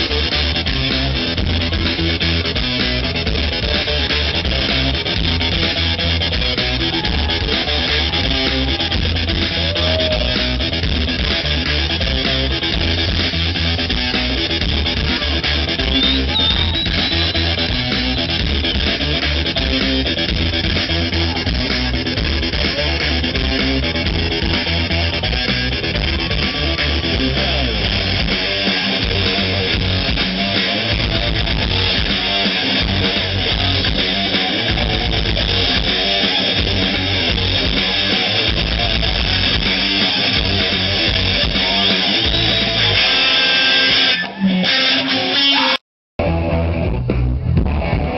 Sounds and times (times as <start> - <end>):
Music: 0.0 - 48.1.